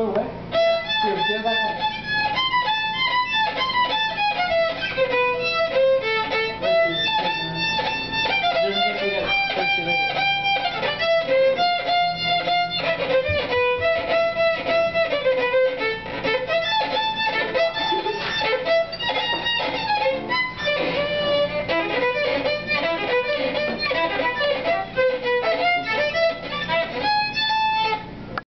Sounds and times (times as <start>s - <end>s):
Violin, fiddle: 0.5s - 28.4s.